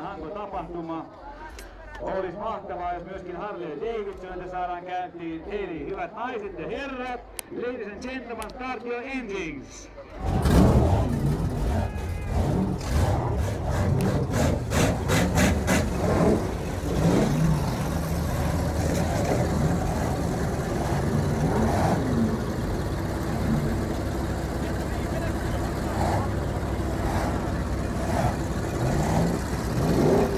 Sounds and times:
Vehicle: 0.0s - 30.3s
Medium engine (mid frequency): 10.0s - 30.3s
Engine starting: 10.1s - 16.5s.

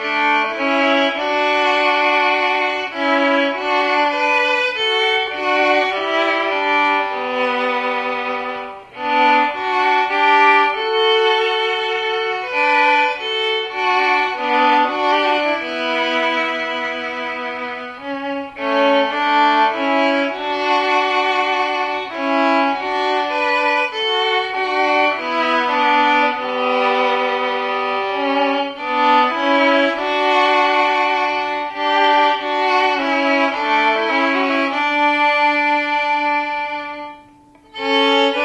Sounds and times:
Violin, fiddle: 0.0s - 38.4s.

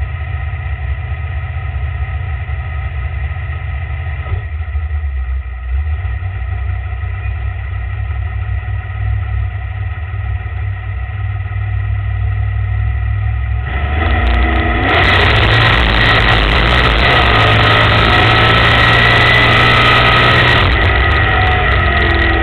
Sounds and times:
Car: 0.0s - 22.4s.

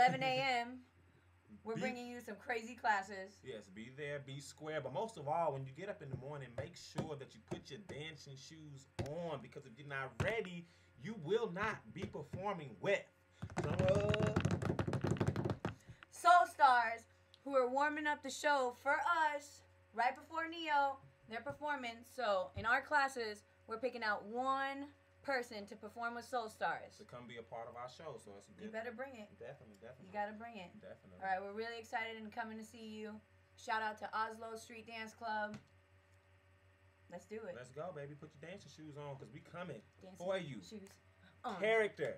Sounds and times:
Speech: 0.0s - 0.8s, 1.6s - 14.4s, 16.2s - 35.6s, 37.2s - 42.1s.

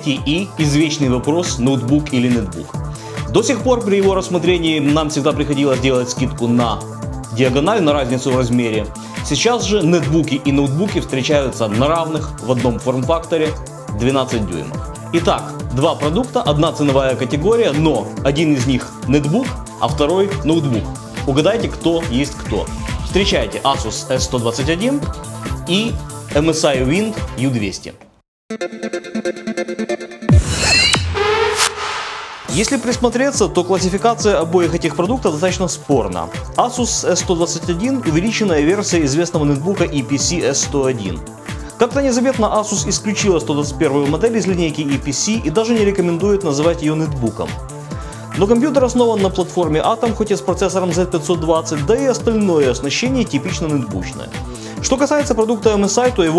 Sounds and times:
Speech: 0.0s - 2.7s, 3.3s - 6.8s, 7.4s - 28.1s, 32.5s - 41.2s, 41.8s - 47.6s, 48.4s - 56.3s
Music: 0.0s - 56.3s.

